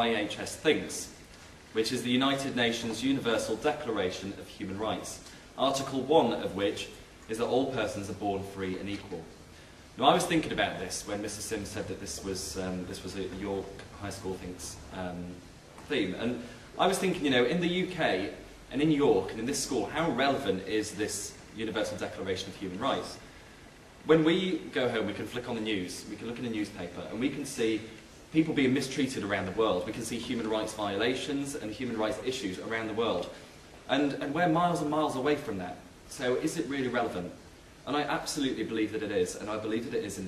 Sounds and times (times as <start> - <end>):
Male speech, man speaking: 0.0 - 9.4, 10.0 - 23.2, 24.0 - 40.2
Narration, monologue: 0.0 - 40.2.